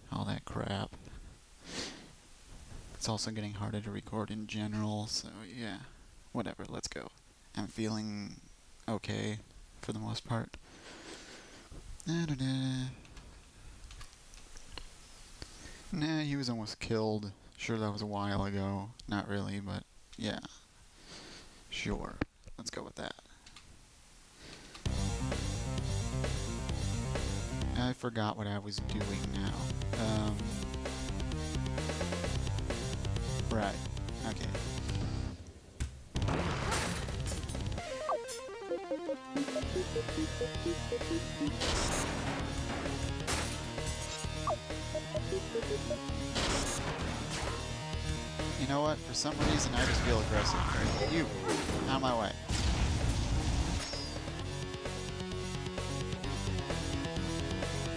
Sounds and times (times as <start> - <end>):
Speech: 0.0 - 1.0, 3.0 - 10.6, 12.0 - 13.0, 15.9 - 20.6, 21.7 - 23.3, 27.7 - 30.5, 33.4 - 34.6, 48.6 - 52.4.